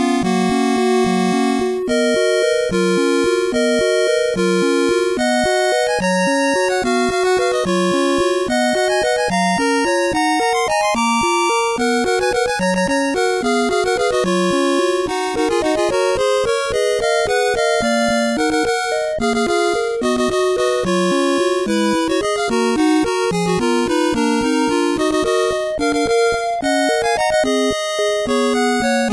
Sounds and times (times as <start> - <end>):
Music: 0.0 - 29.1.